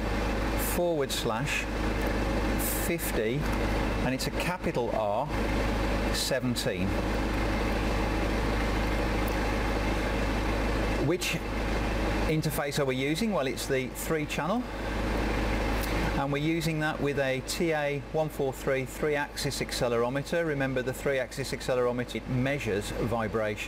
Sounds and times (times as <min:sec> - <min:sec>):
Vehicle: 0:00.0 - 0:23.6
Speech: 0:00.6 - 0:01.7, 0:02.6 - 0:05.4, 0:06.2 - 0:07.0, 0:11.0 - 0:11.5, 0:12.3 - 0:14.7, 0:16.2 - 0:23.6.